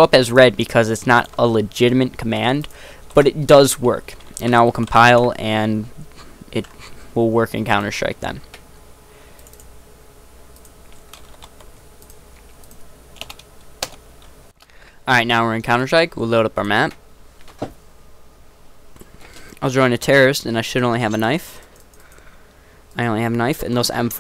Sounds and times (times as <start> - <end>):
Speech: 0.0 - 8.5, 15.1 - 17.0, 19.6 - 21.6, 23.0 - 24.2
Typing: 9.4 - 9.7, 10.6 - 14.0.